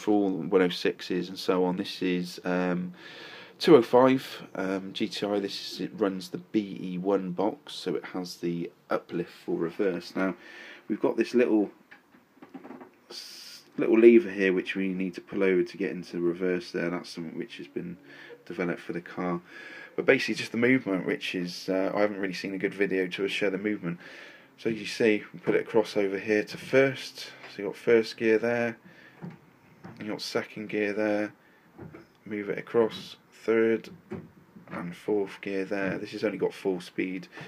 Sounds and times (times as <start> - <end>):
Speech: 0.0 - 3.0, 3.6 - 11.8, 13.1 - 24.0, 24.6 - 28.8, 30.0 - 31.4, 32.2 - 34.0, 34.7 - 37.4.